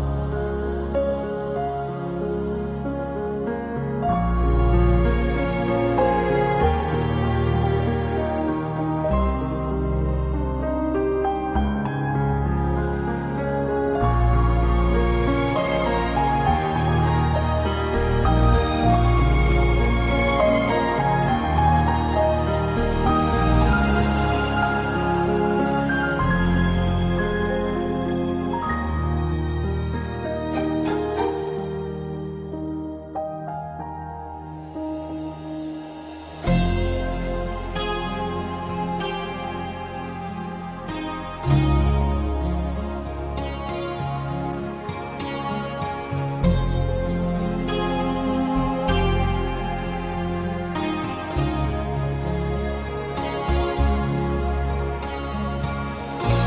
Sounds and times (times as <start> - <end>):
New-age music: 0.0 - 56.4.